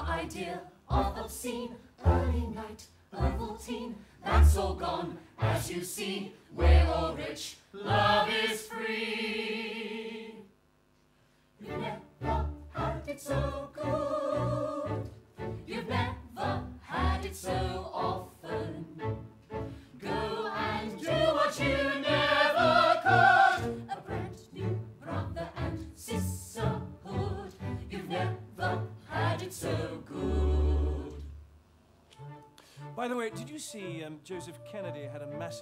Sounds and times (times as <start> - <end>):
Music: 0.0 - 10.5, 11.6 - 35.6.